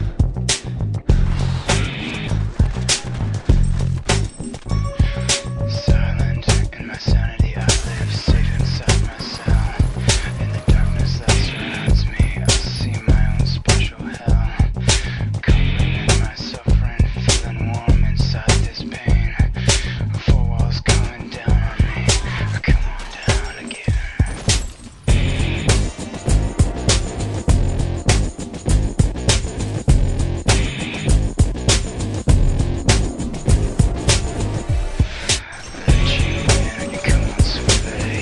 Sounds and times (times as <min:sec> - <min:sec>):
Theme music: 0:01.1 - 0:13.6, 0:25.1 - 0:29.8, 0:32.3 - 0:38.2
Pop music: 0:05.0 - 0:14.4, 0:32.9 - 0:38.2.